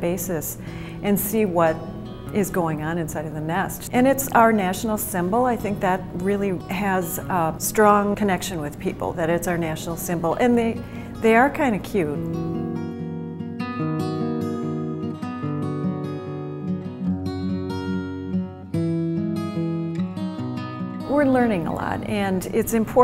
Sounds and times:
Speech: 0.0s - 12.2s, 21.1s - 23.0s
Music: 0.0s - 23.0s.

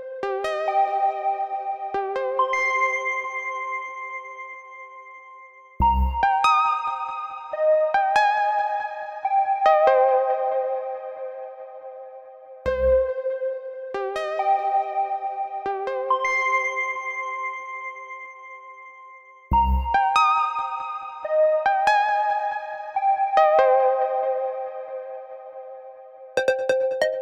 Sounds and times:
Music: 0.0s - 27.2s.

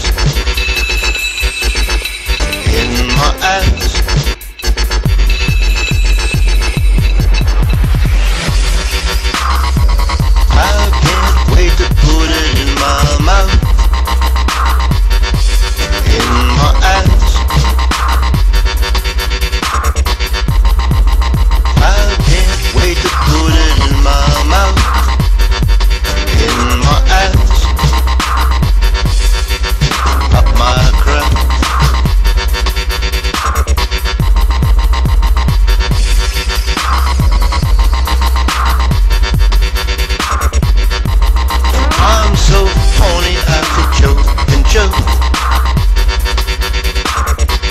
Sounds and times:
Dubstep: 0.0s - 47.7s.

